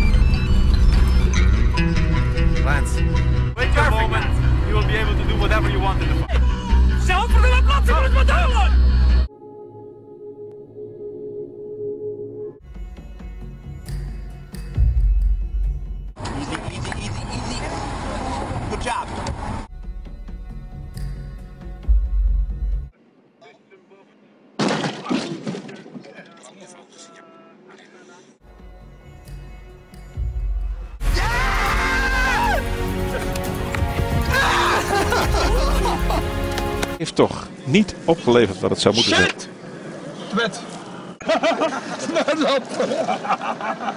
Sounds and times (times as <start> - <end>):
Music: 0.0 - 16.2, 19.7 - 23.0, 28.4 - 37.0.